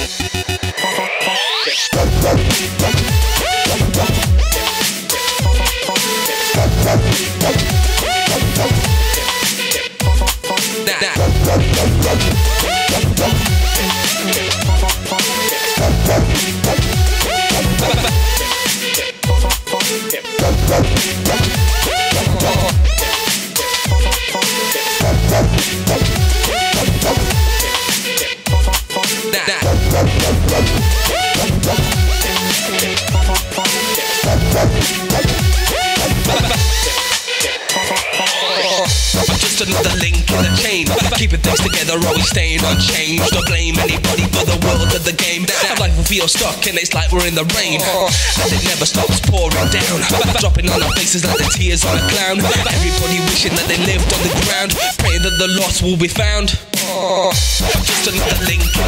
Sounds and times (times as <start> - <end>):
Dubstep: 0.0 - 58.8.